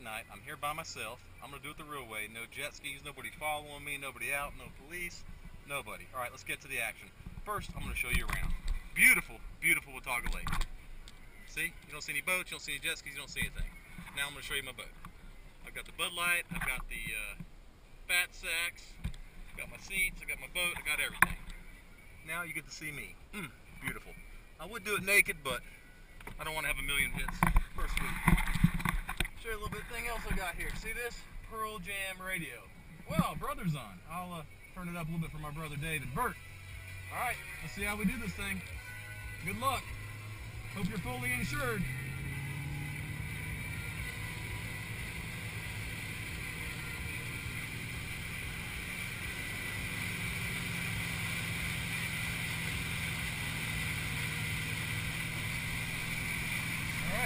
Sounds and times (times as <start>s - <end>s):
Speech: 0.0s - 10.5s, 11.5s - 14.9s, 15.6s - 17.4s, 18.1s - 19.0s, 19.6s - 21.2s, 22.2s - 25.6s, 26.4s - 28.2s, 29.4s - 36.4s, 37.1s - 38.6s, 40.8s - 41.9s, 57.0s - 57.2s.